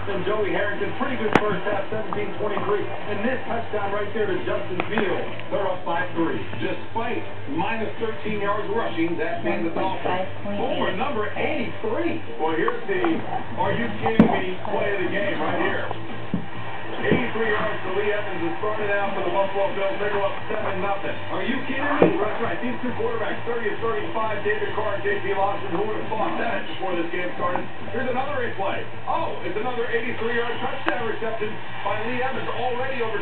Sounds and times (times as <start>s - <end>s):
Speech: 0.0s - 16.0s, 17.0s - 33.2s.